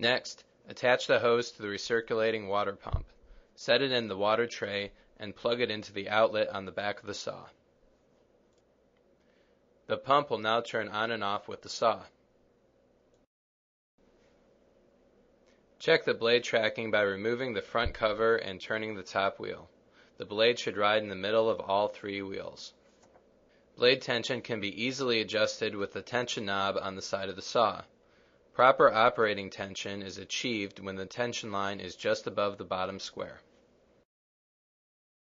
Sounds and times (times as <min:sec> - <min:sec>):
Speech: 0:00.0 - 0:07.6, 0:09.9 - 0:12.2, 0:15.8 - 0:22.8, 0:23.8 - 0:28.0, 0:28.6 - 0:33.5.